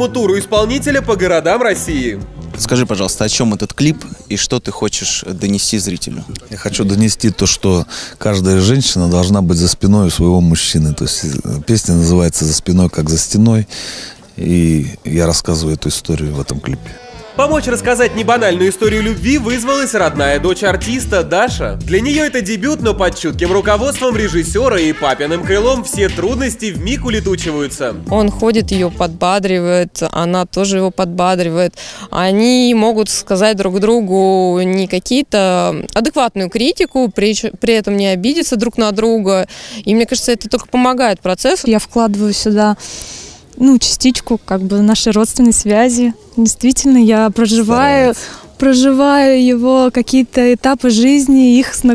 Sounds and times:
Music: 0.0 - 4.3, 16.4 - 29.4, 47.7 - 48.2
Speech: 14.4 - 42.8, 43.6 - 51.9.

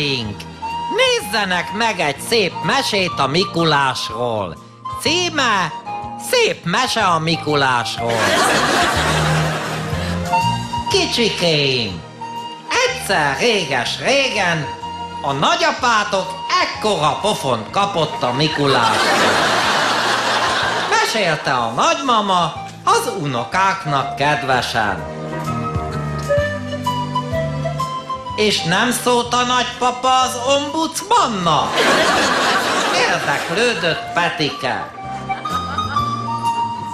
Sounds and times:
Speech: 0.0 - 8.2, 10.9 - 12.0, 12.7 - 14.7, 15.3 - 19.0, 20.9 - 25.0, 28.4 - 31.7, 32.9 - 34.9
Music: 0.0 - 36.9.

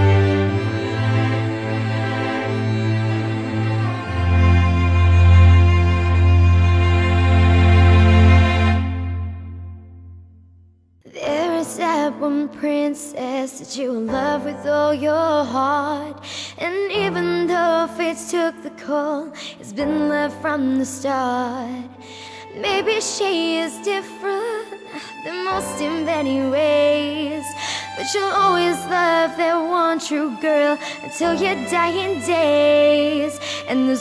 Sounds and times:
Music: 0.0 - 34.0.

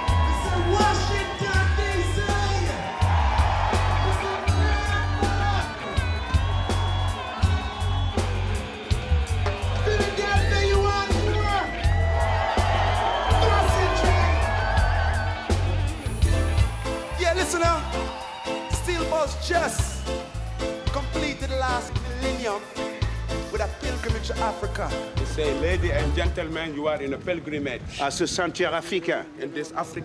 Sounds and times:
Music: 0.0 - 29.0.

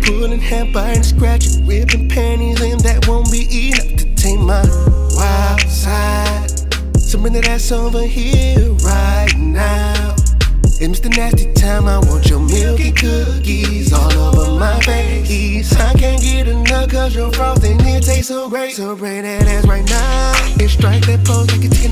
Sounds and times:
Rhythm and blues: 0.0 - 18.3, 19.4 - 21.9.

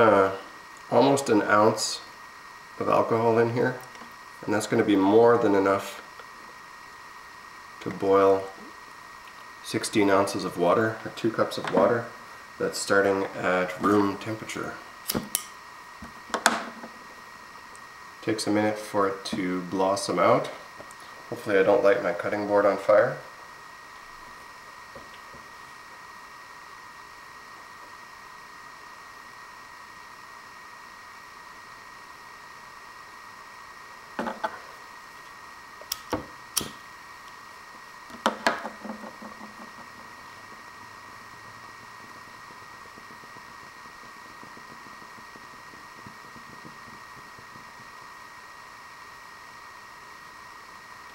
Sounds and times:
Speech: 0.0 - 2.1, 2.8 - 3.8, 4.4 - 6.0, 7.8 - 8.6, 9.6 - 14.8, 18.2 - 20.6, 21.3 - 23.3.

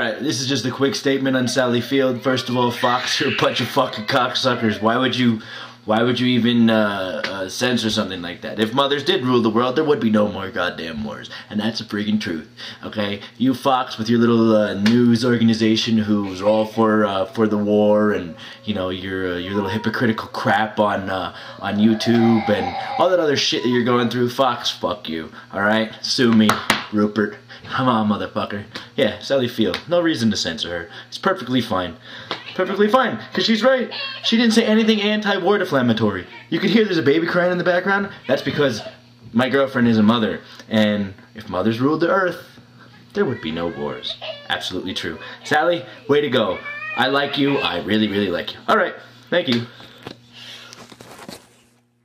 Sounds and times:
Male speech, man speaking: 0.0 - 49.7
Narration, monologue: 0.0 - 50.9.

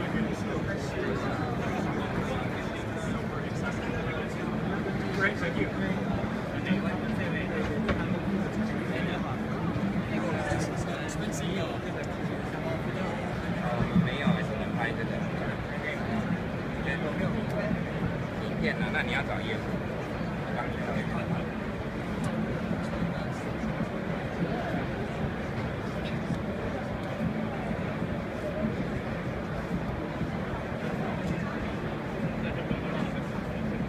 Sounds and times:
Speech: 0.0 - 33.8.

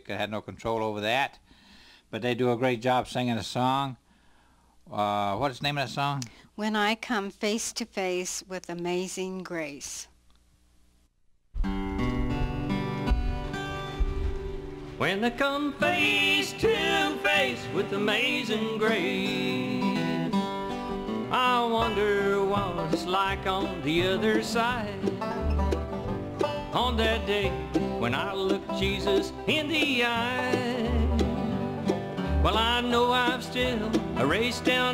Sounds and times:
Gospel music: 11.7 - 34.9.

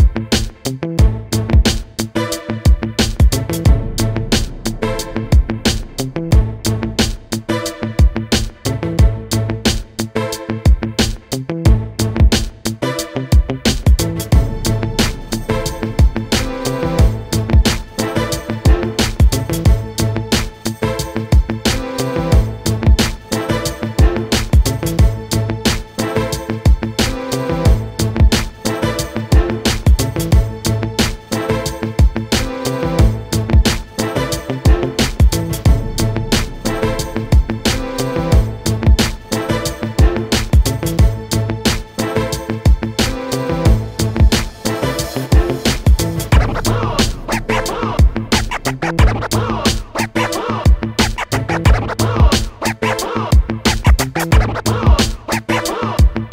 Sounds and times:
Music: 0.0 - 56.3.

